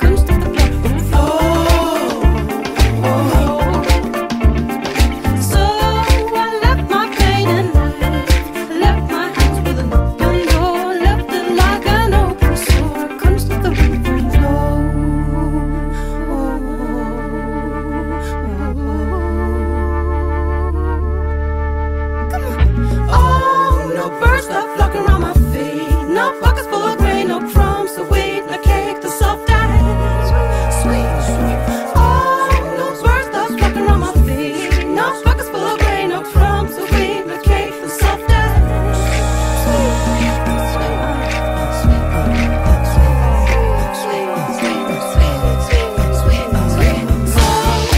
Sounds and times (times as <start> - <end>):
Rhythm and blues: 0.0 - 15.2, 22.3 - 47.9.